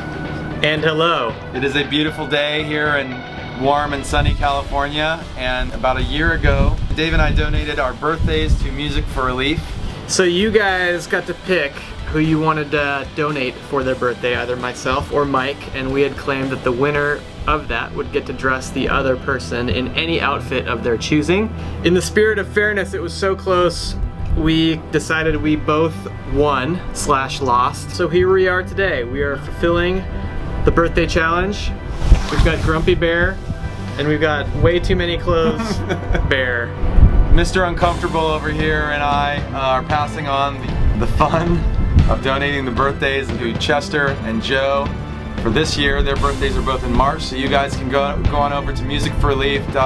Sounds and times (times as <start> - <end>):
Music: 0.0 - 49.8
Speech: 0.6 - 30.0, 30.7 - 33.4, 34.0 - 36.7, 37.4 - 49.8.